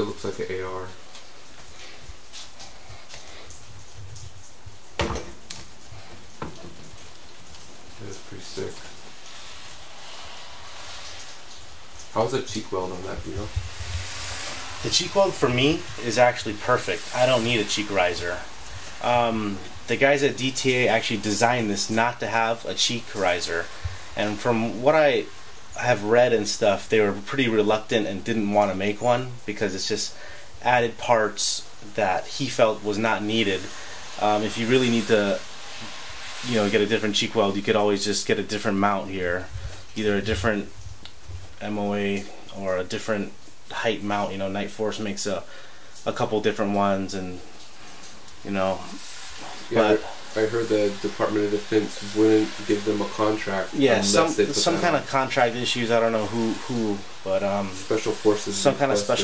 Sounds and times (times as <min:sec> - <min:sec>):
Speech: 0:00.0 - 0:01.0, 0:08.0 - 0:08.9, 0:12.1 - 0:13.6, 0:14.8 - 0:35.5, 0:36.4 - 0:40.7, 0:41.6 - 0:47.5, 0:48.4 - 0:49.0, 0:49.6 - 0:59.2
Inside, small room: 0:00.0 - 0:59.2.